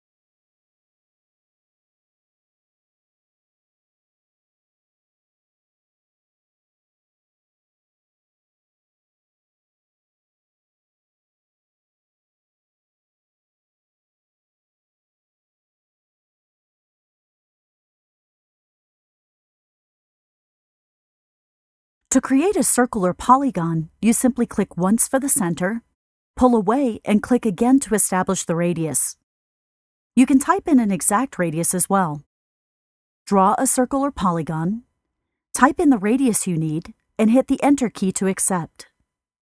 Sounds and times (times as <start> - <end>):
Speech: 22.1 - 25.8, 26.4 - 29.2, 30.2 - 32.3, 33.3 - 34.8, 35.6 - 38.9.